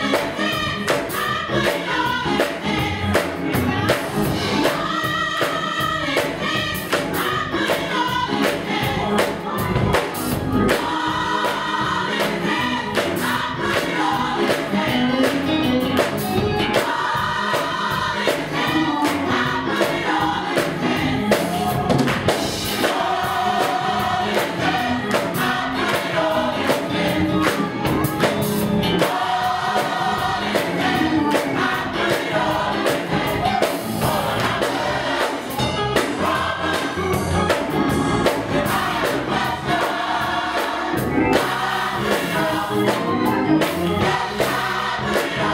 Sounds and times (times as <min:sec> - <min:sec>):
Choir: 0:00.0 - 0:45.5.